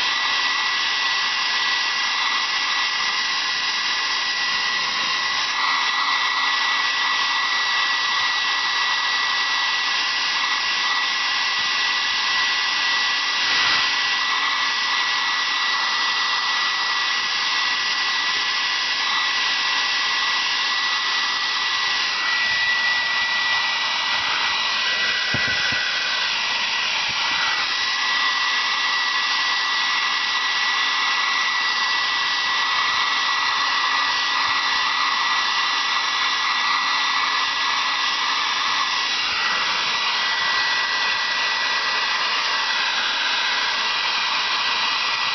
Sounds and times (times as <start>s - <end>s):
Hair dryer: 0.0s - 45.3s.